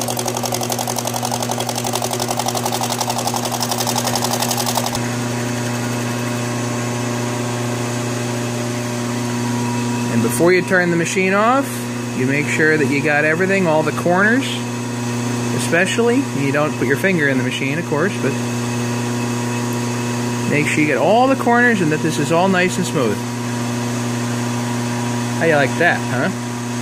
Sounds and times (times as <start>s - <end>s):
Speech: 10.1s - 14.7s, 15.5s - 18.4s, 20.5s - 23.3s, 25.4s - 26.4s.